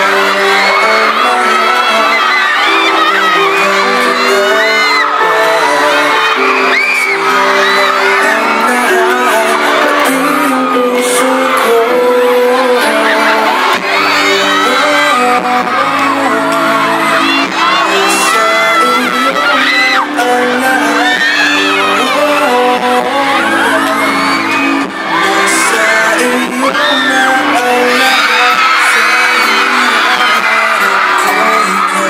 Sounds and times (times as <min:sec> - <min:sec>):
Music: 0:00.0 - 0:32.0
Singing: 0:00.0 - 0:32.0.